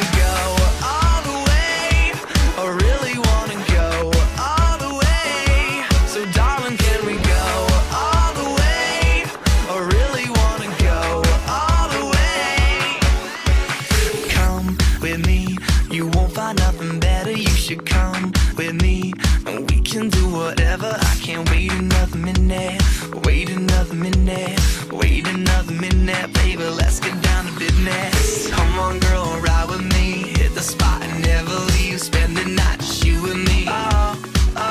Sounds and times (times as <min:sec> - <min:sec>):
Music: 0:00.0 - 0:34.7.